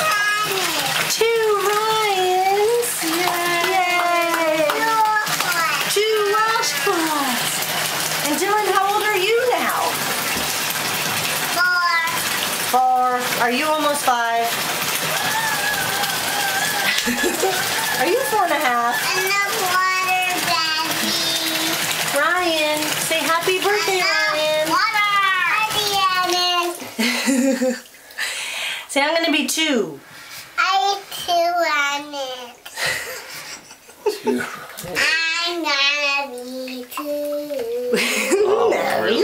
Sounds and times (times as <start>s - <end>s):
Child speech, kid speaking: 0.0s - 1.1s, 2.8s - 7.4s, 11.5s - 12.2s, 18.9s - 21.8s, 23.6s - 26.8s, 30.6s - 32.6s, 35.0s - 38.0s
Bathtub (filling or washing): 0.0s - 39.2s.